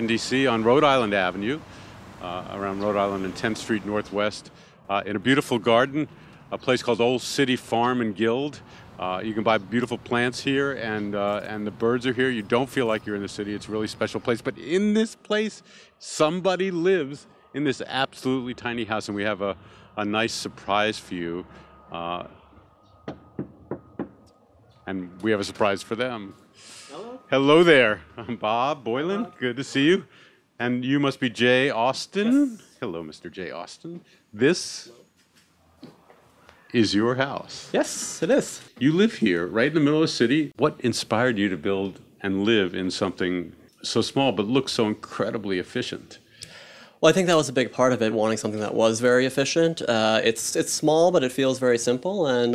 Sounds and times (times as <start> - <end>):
Speech: 0.0 - 22.4, 24.9 - 35.0, 36.7 - 46.2, 47.0 - 52.5.